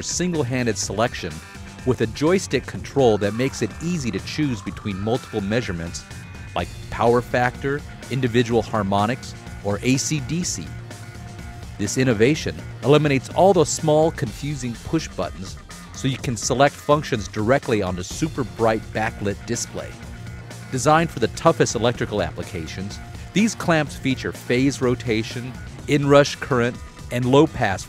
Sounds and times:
Speech: 0.0 - 6.0, 6.6 - 10.8, 11.8 - 20.0, 20.7 - 27.8
Music: 0.0 - 27.8.

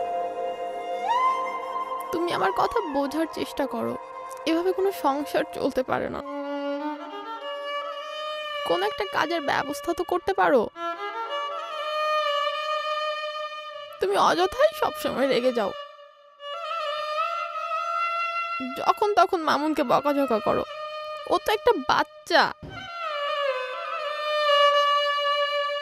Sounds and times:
Bowed string instrument: 0.0 - 25.8
Speech: 2.1 - 6.2, 8.7 - 10.7, 14.0 - 15.8, 18.6 - 20.7, 21.3 - 22.6.

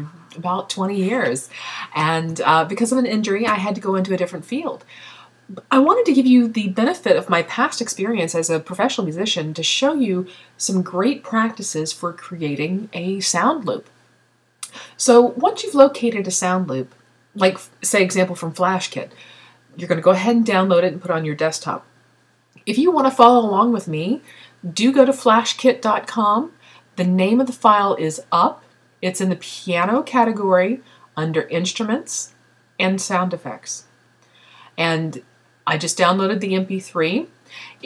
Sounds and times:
Speech: 0.0 - 4.9, 5.5 - 13.9, 14.6 - 19.1, 19.8 - 21.9, 22.6 - 33.9, 34.8 - 37.8.

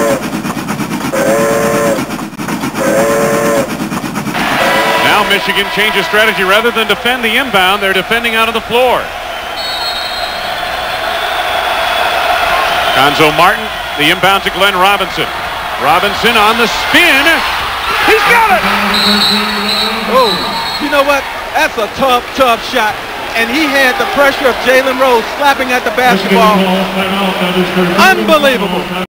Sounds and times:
Speech: 5.0 - 9.1, 18.0 - 29.0.

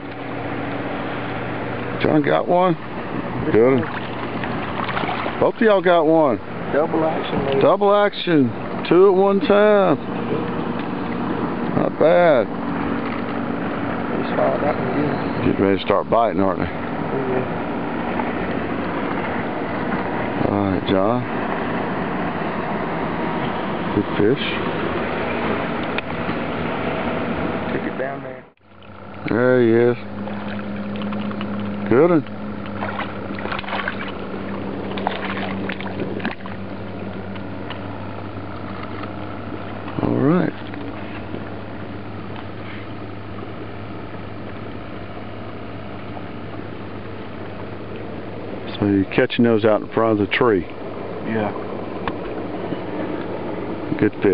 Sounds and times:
Outside, rural or natural: 0.0 - 54.3
Slosh: 3.9 - 5.4, 32.8 - 34.2, 34.9 - 36.5.

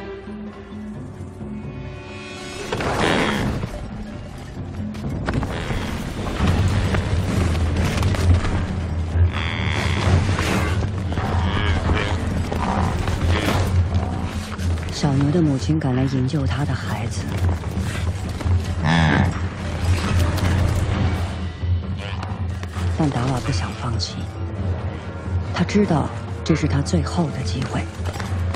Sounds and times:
Cattle, bovinae: 9.2 - 14.6.

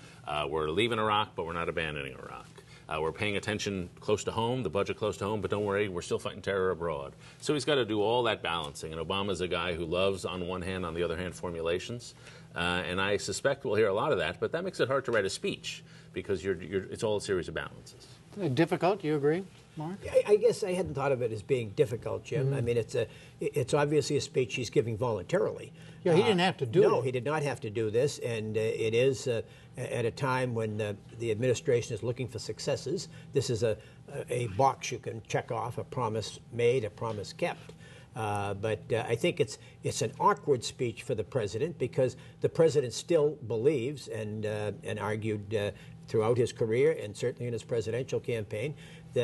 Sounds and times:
Narration, monologue: 0.0 - 49.2
Male speech, man speaking: 0.3 - 37.6, 38.2 - 49.2.

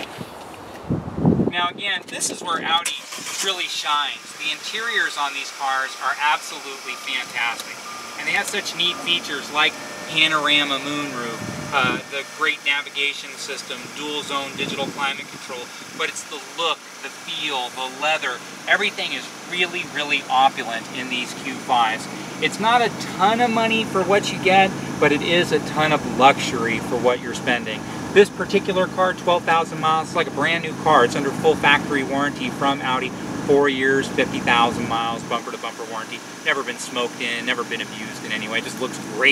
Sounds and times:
Car: 0.0 - 39.3
Outside, urban or manmade: 0.0 - 39.3
Speech: 1.5 - 39.3.

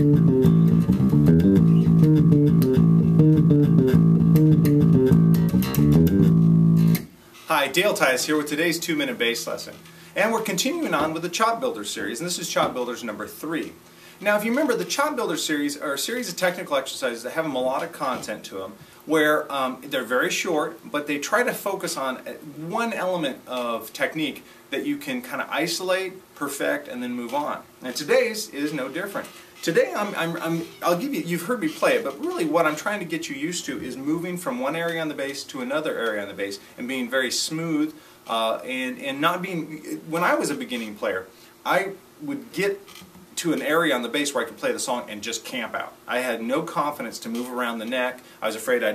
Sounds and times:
Speech: 7.4 - 48.9.

